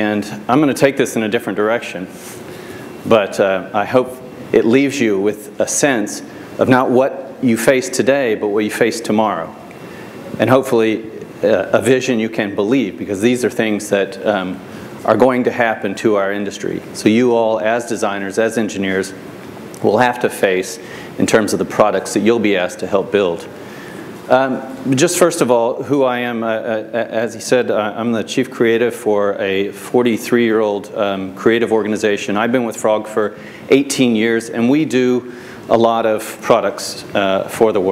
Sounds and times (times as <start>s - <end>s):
Speech: 0.0s - 2.2s, 3.0s - 9.7s, 10.3s - 19.2s, 19.8s - 23.5s, 24.3s - 37.9s.